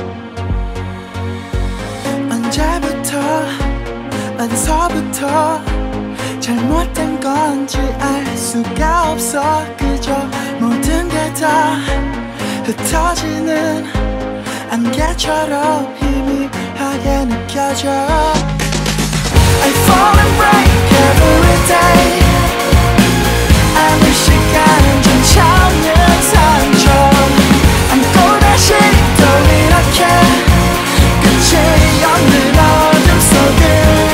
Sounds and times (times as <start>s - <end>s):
Music: 0.0s - 34.1s.